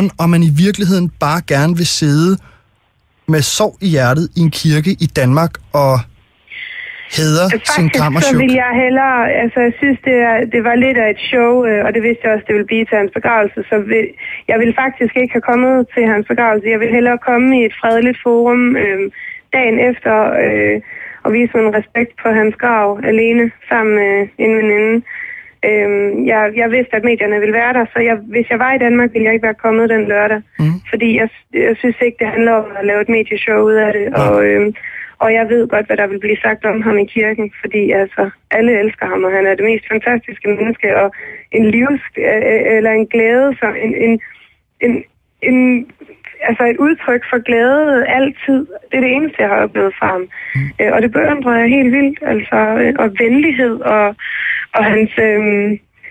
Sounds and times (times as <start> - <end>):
Speech: 3.3 - 6.1, 7.1 - 25.0, 25.6 - 33.2, 33.9 - 39.7, 40.3 - 55.8
Radio: 4.7 - 8.6, 30.6 - 30.8, 34.1 - 35.1, 49.9 - 51.0.